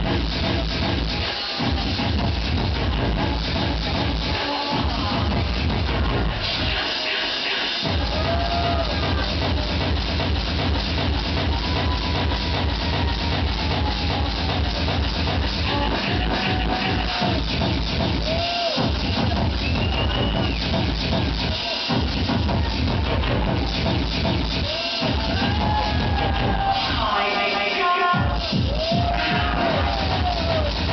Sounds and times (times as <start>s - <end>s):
Pop music: 0.0s - 30.9s.